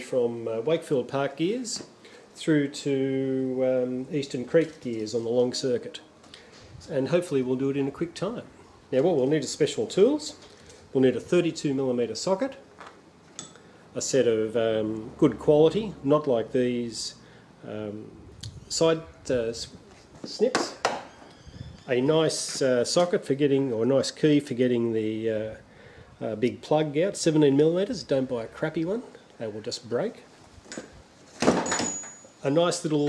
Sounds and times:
Speech: 0:00.0 - 0:06.1, 0:06.8 - 0:12.7, 0:14.0 - 0:20.8, 0:21.9 - 0:25.6, 0:26.2 - 0:30.3, 0:32.4 - 0:33.0.

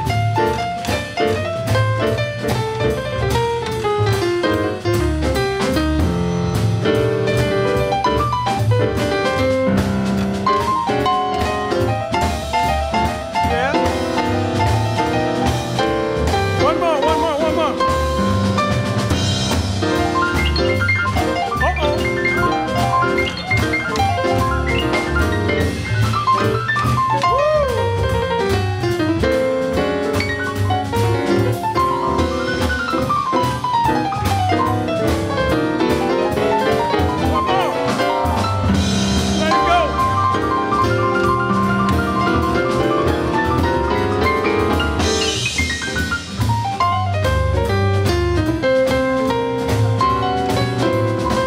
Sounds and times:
Music: 0:00.0 - 0:51.4
Speech: 0:13.5 - 0:13.8, 0:16.6 - 0:17.8, 0:21.6 - 0:22.0, 0:39.4 - 0:40.0.

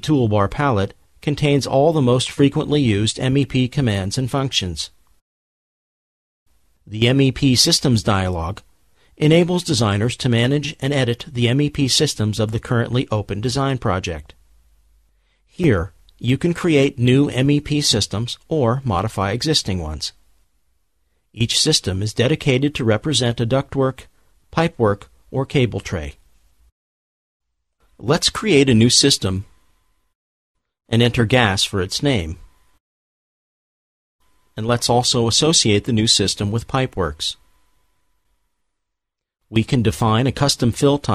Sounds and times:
Speech: 0:00.0 - 0:05.0, 0:06.9 - 0:14.4, 0:15.5 - 0:20.2, 0:21.4 - 0:26.2, 0:28.0 - 0:29.5, 0:30.9 - 0:32.5, 0:34.6 - 0:37.4, 0:39.5 - 0:41.1.

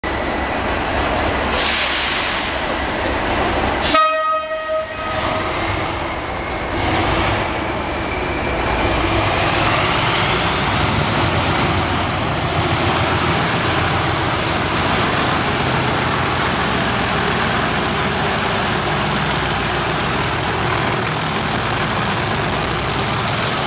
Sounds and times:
Railroad car, train wagon: 0:00.0 - 0:23.6
Train horn: 0:03.8 - 0:05.6.

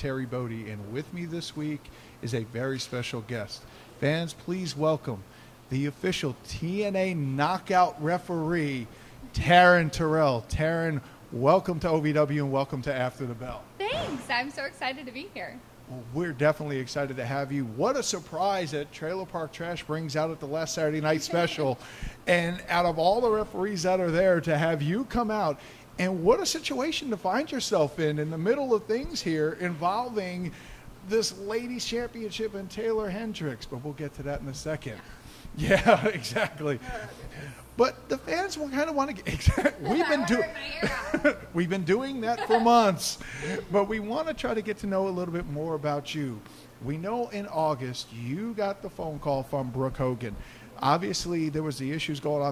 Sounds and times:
Speech: 0:31.1 - 0:41.0.

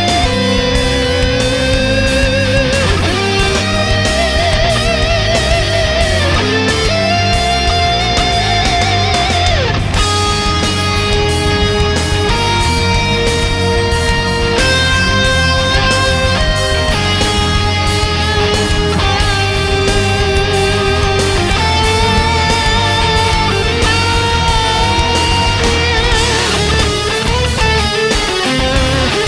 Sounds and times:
Music: 0:00.0 - 0:29.2.

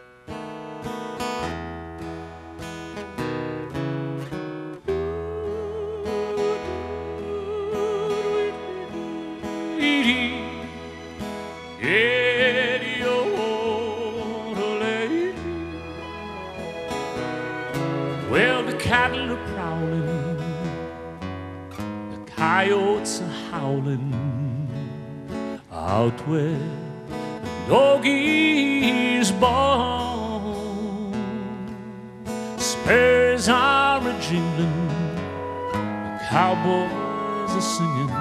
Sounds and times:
Music: 0:00.0 - 0:38.2.

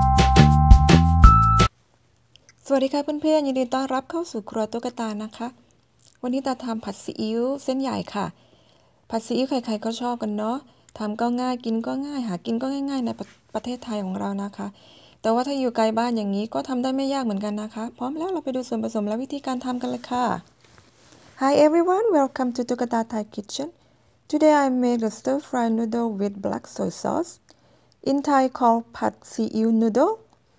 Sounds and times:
Speech: 0:02.6 - 0:05.6, 0:06.2 - 0:08.4, 0:09.1 - 0:20.5, 0:21.4 - 0:27.4, 0:28.0 - 0:30.3.

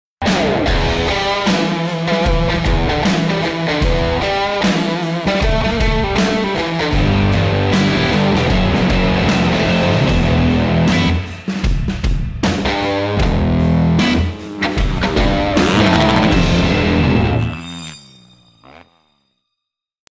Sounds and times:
Music: 0:00.2 - 0:17.6.

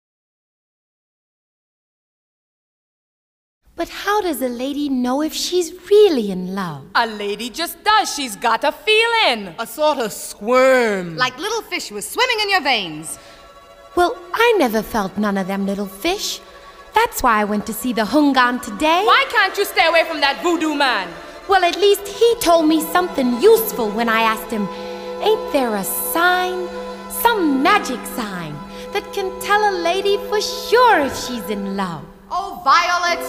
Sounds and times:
Conversation: 0:03.8 - 0:33.2.

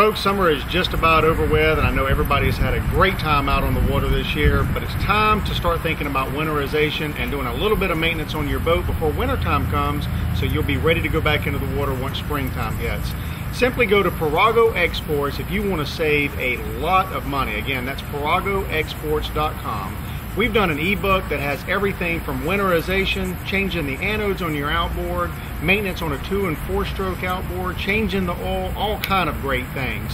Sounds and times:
Speech: 0:00.0 - 0:30.1.

